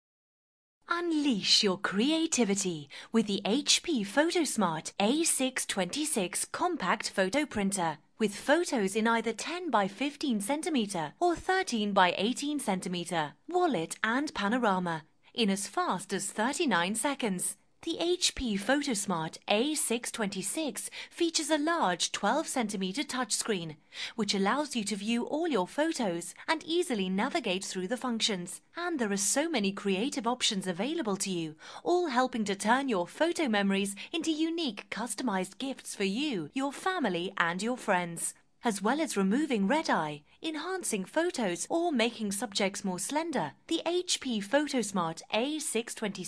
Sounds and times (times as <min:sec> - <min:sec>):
Speech: 0:00.9 - 0:46.2.